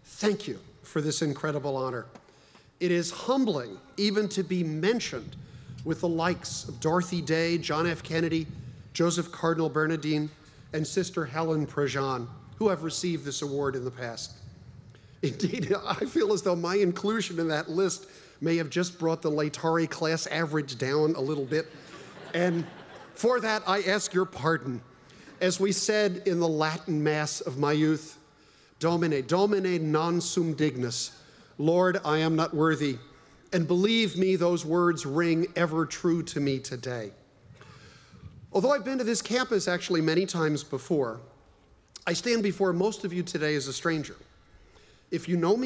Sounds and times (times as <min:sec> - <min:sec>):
Narration, monologue: 0:00.0 - 0:45.6
Male speech, man speaking: 0:00.1 - 0:02.1, 0:02.8 - 0:14.4, 0:15.2 - 0:21.7, 0:22.3 - 0:24.8, 0:25.4 - 0:28.2, 0:28.8 - 0:37.2, 0:38.5 - 0:41.3, 0:42.0 - 0:44.2, 0:45.1 - 0:45.6.